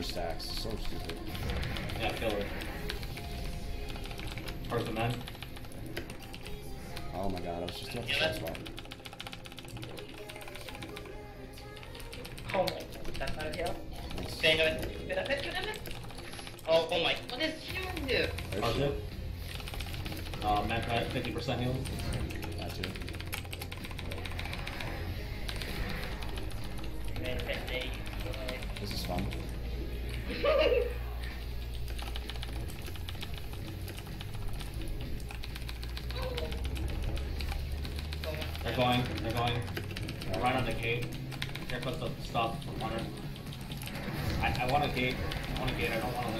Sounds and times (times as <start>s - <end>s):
Laughter: 30.2s - 31.0s.